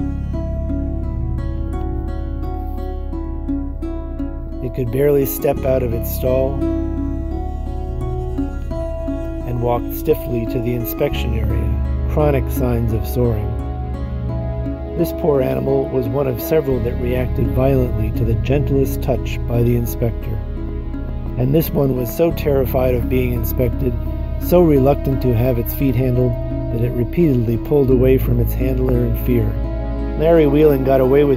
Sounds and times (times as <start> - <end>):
Music: 0.0 - 31.3
Speech: 4.6 - 6.6, 9.4 - 13.6, 15.0 - 20.4, 21.4 - 29.6, 30.2 - 31.3.